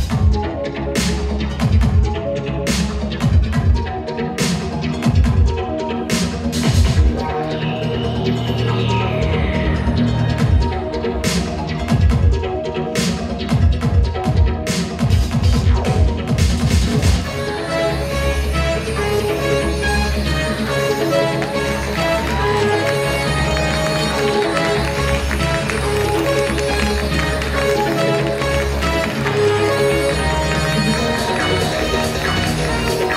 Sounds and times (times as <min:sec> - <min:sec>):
Music: 0:00.0 - 0:33.1.